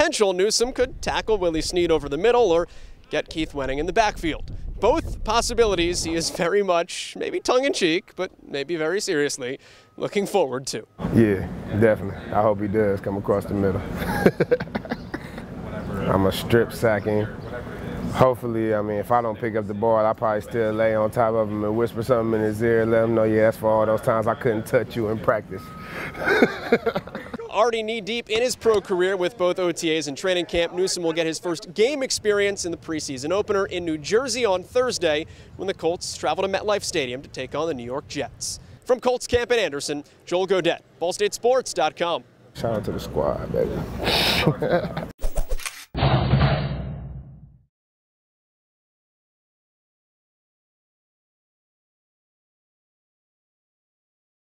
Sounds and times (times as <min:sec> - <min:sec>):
Speech: 0:00.0 - 0:13.9, 0:15.6 - 0:25.6, 0:27.4 - 0:43.8.